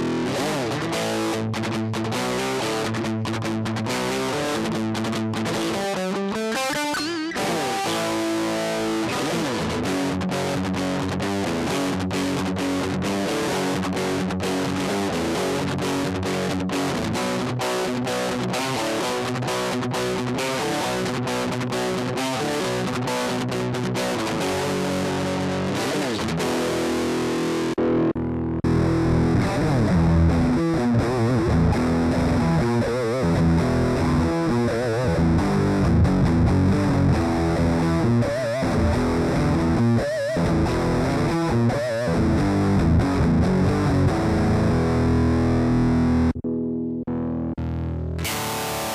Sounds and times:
Music: 0.0 - 48.9.

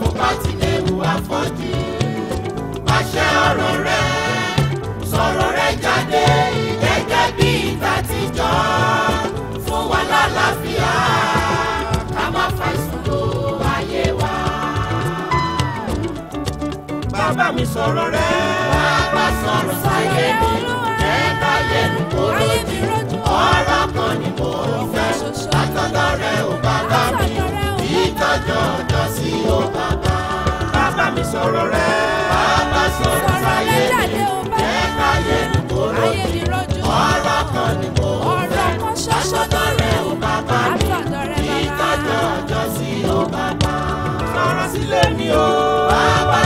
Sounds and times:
Choir: 0.0 - 16.1, 17.1 - 46.4.

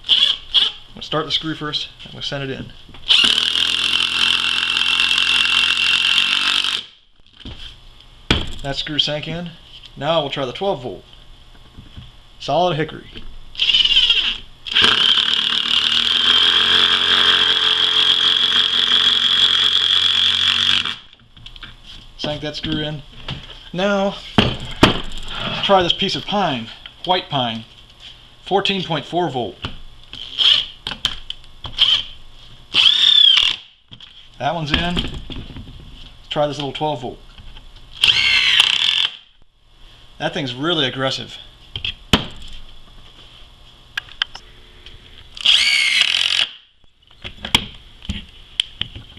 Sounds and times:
Power tool: 3.1 - 7.0, 13.6 - 21.1, 32.7 - 33.7, 38.0 - 39.3, 45.4 - 46.6.

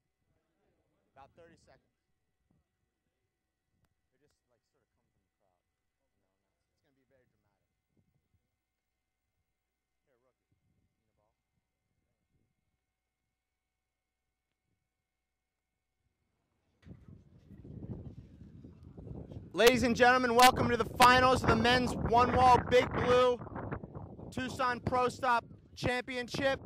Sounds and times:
Speech: 0.3 - 2.0, 4.1 - 7.7, 10.0 - 10.4, 19.6 - 23.4, 24.4 - 26.6.

